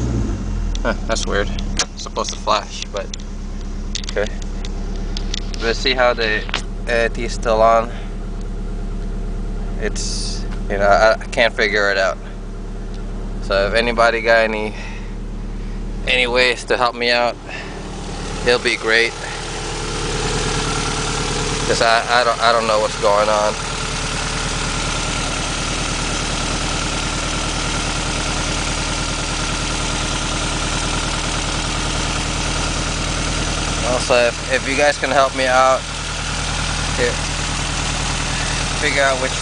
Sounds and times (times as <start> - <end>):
Car: 0.0 - 39.4
Engine: 0.0 - 39.4
Speech: 0.9 - 3.1, 5.6 - 8.0, 9.8 - 12.3, 13.4 - 14.8, 16.1 - 17.4, 18.4 - 19.3, 21.7 - 23.6, 33.8 - 35.8, 37.0 - 37.2, 38.8 - 39.4.